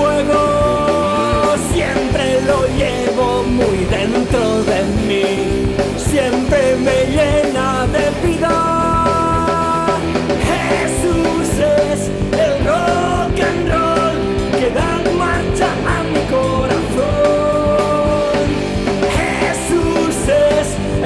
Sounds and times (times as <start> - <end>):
Music: 0.0 - 21.0.